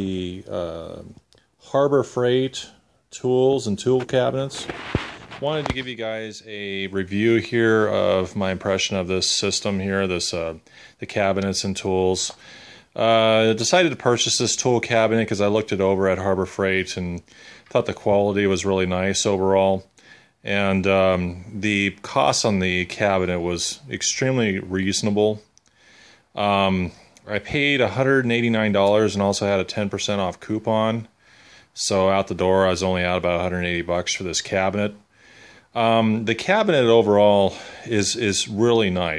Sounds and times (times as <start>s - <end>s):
Speech: 0.0s - 12.4s, 13.0s - 25.5s, 26.4s - 31.2s, 31.8s - 35.1s, 35.7s - 39.1s.